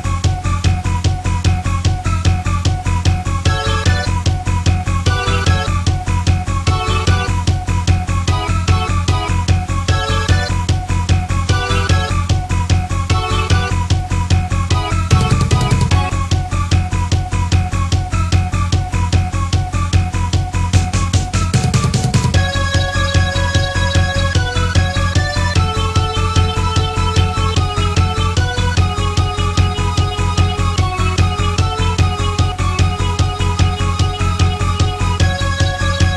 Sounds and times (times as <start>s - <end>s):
Music: 0.0s - 36.1s.